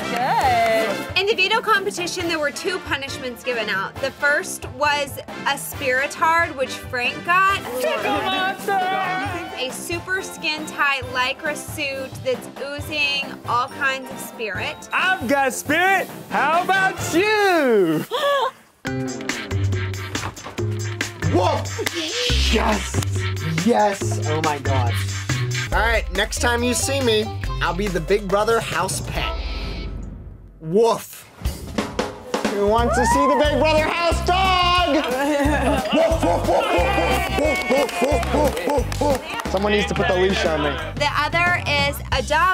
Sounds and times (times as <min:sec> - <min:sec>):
Music: 0:00.0 - 0:17.8, 0:18.8 - 0:30.4, 0:31.3 - 0:42.5.